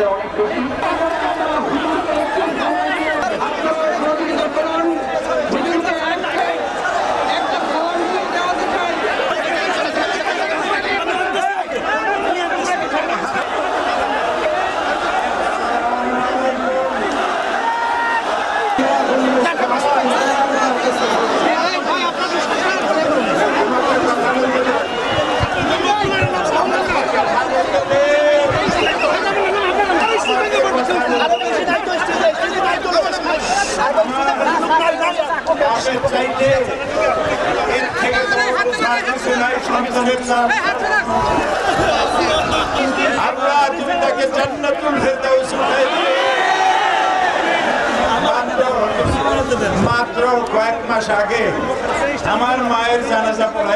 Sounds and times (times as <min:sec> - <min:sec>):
Male speech, man speaking: 0:00.0 - 0:13.7, 0:15.6 - 0:17.1, 0:18.7 - 0:46.8, 0:48.0 - 0:53.7
Conversation: 0:00.0 - 0:15.2, 0:15.8 - 0:53.7.